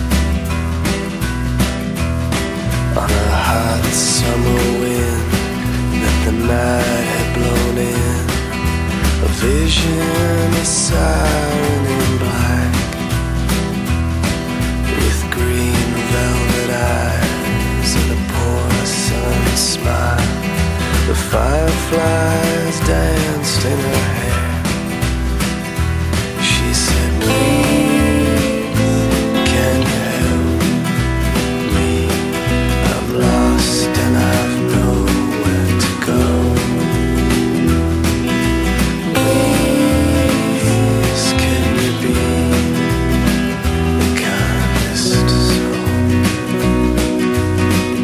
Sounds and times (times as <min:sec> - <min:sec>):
Music: 0:00.0 - 0:48.0.